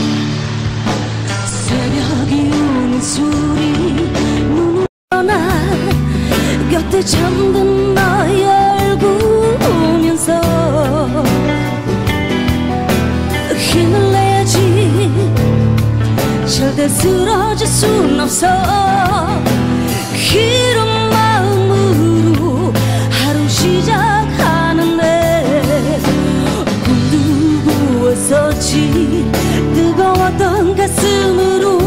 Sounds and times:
Music: 0.0s - 31.8s.

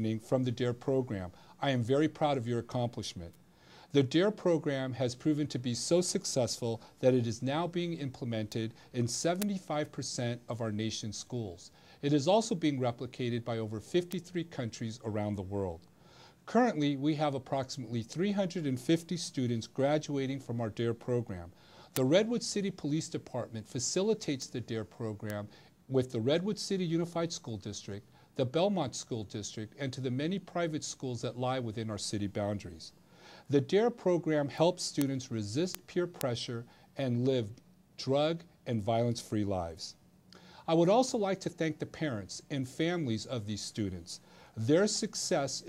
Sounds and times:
Male speech, man speaking: 0.0s - 15.8s, 16.5s - 40.0s, 40.6s - 45.6s.

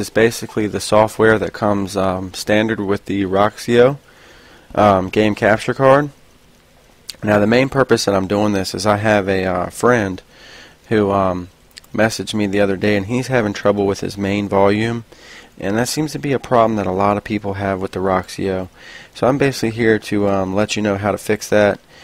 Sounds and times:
Speech: 0.0s - 4.0s, 4.7s - 6.2s, 7.1s - 10.3s, 10.9s - 21.8s.

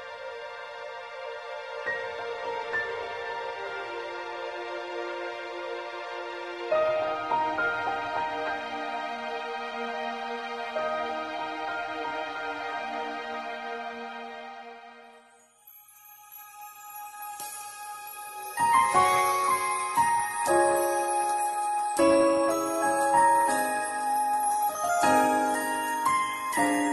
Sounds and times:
Gospel music: 16.7s - 26.9s.

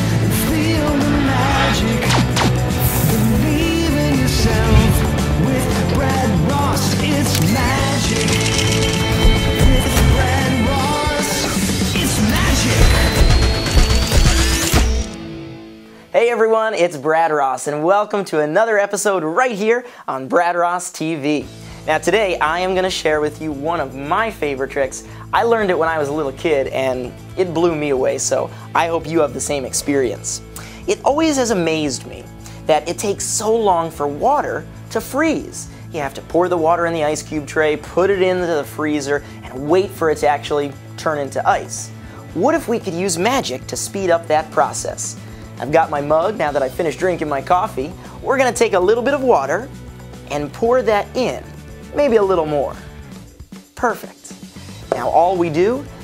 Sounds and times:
Music: 0.0s - 56.0s
Speech: 16.1s - 49.7s, 50.3s - 52.8s, 53.8s - 55.9s.

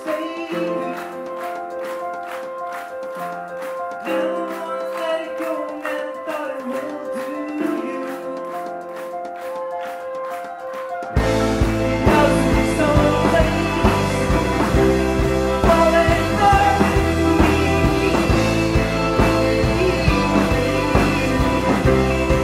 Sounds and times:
Singing: 0.0s - 1.5s, 4.0s - 8.9s, 11.7s - 22.4s
Psychedelic rock: 11.2s - 22.4s.

